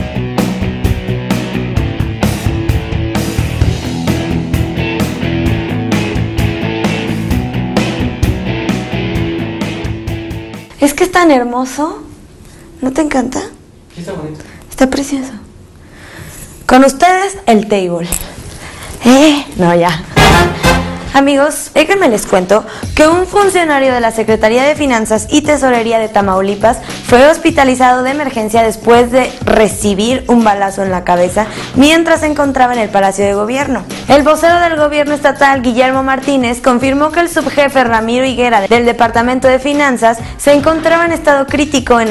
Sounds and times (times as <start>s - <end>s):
Music: 0.0s - 11.3s, 20.0s - 42.1s.